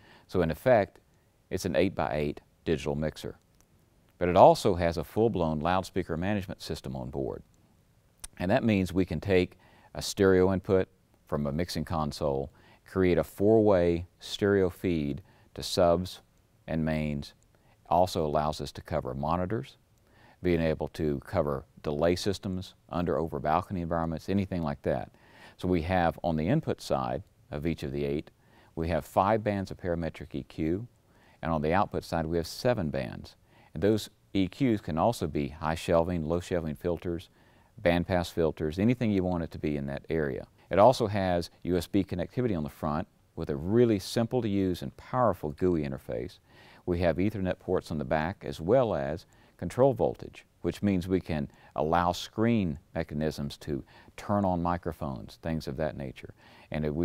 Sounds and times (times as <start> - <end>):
Speech: 0.3 - 3.4, 4.2 - 7.5, 8.2 - 19.8, 20.4 - 57.0.